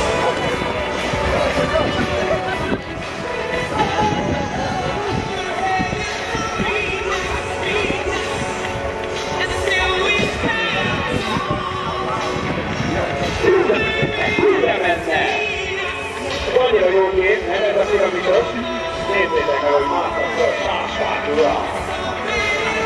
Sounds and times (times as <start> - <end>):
Run: 0.0 - 16.6
Music: 0.0 - 22.8
Speech: 10.1 - 21.9.